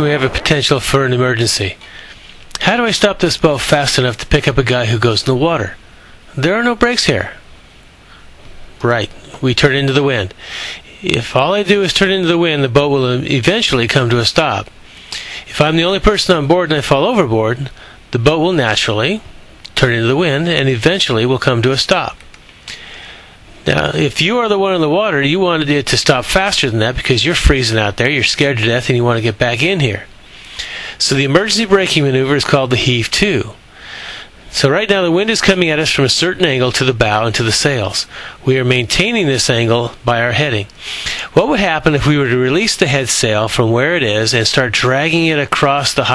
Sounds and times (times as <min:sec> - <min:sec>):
Speech: 0:00.0 - 0:01.8, 0:02.5 - 0:07.5, 0:08.8 - 0:22.2, 0:23.6 - 0:30.1, 0:31.0 - 0:33.6, 0:34.5 - 0:46.1.